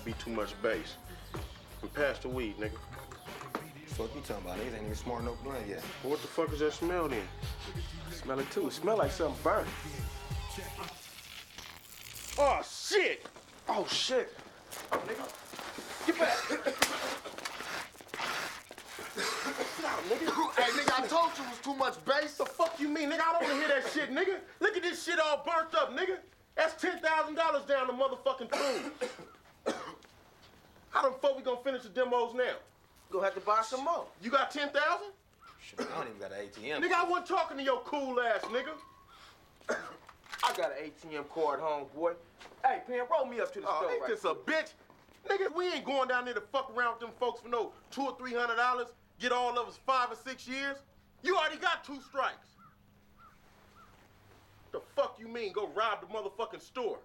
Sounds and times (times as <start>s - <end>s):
Speech: 0.0s - 1.0s, 1.8s - 7.4s, 8.1s - 9.8s, 12.4s - 15.4s, 19.7s - 28.7s, 30.9s - 38.8s, 40.4s - 52.6s, 54.8s - 57.0s.